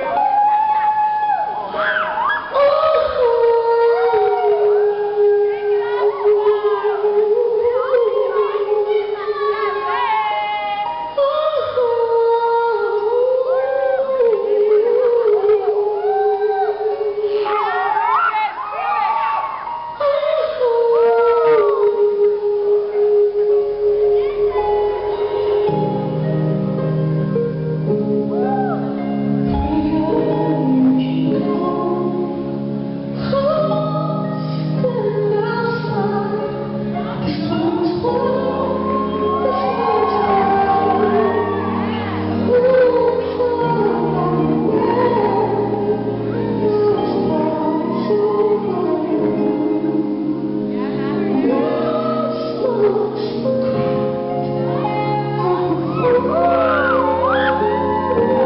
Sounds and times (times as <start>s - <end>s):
Inside, large room or hall: 0.0s - 58.4s
Music: 0.0s - 58.4s.